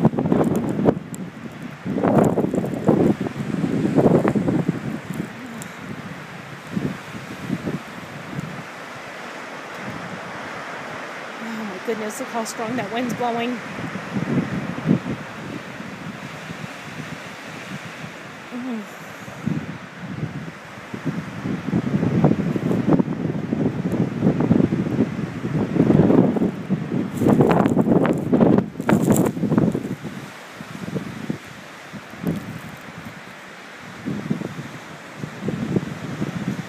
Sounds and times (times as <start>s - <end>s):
Rustling leaves: 0.0s - 36.6s
Speech: 11.4s - 13.6s, 18.6s - 19.0s.